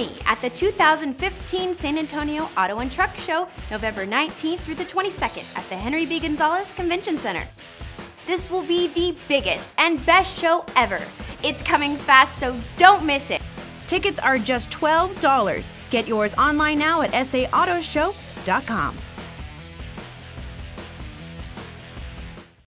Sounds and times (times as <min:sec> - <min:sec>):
Speech: 0:00.0 - 0:07.5, 0:08.3 - 0:19.0
Music: 0:00.0 - 0:22.6.